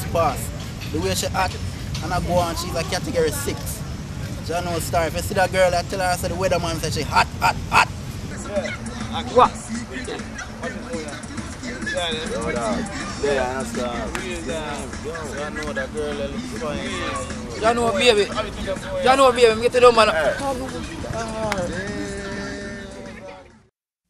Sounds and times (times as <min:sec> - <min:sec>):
Speech: 0:00.0 - 0:03.8, 0:08.3 - 0:23.6
Music: 0:08.3 - 0:23.7.